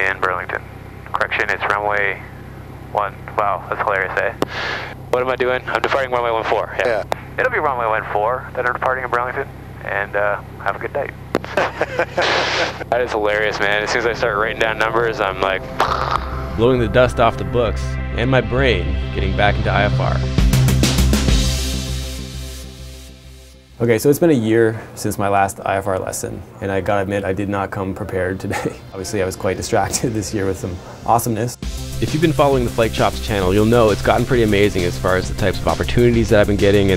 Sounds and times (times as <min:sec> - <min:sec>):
Speech: 0:00.0 - 0:11.2, 0:12.3 - 0:15.6, 0:16.5 - 0:20.3, 0:23.8 - 0:36.9
Music: 0:13.3 - 0:23.9, 0:28.8 - 0:36.9.